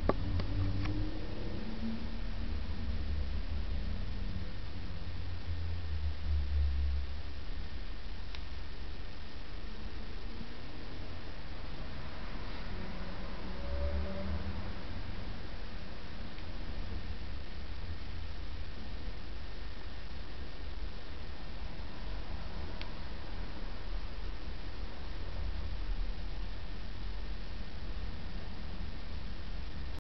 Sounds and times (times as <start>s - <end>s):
Inside, small room: 0.0s - 30.0s
Silence: 0.0s - 30.0s.